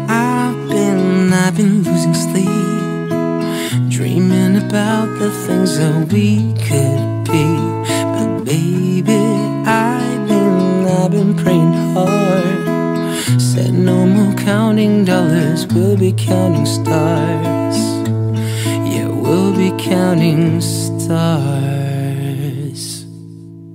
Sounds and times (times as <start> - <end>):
Music: 0.0 - 23.7.